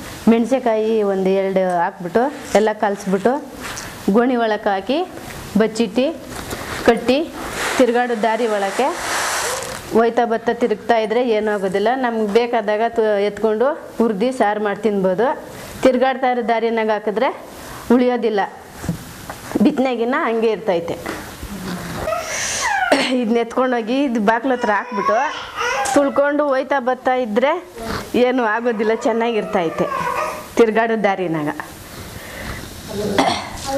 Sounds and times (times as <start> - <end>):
Speech: 0.3 - 6.2, 6.8 - 9.0, 9.9 - 18.6, 19.5 - 21.2, 23.1 - 30.0, 30.6 - 31.7.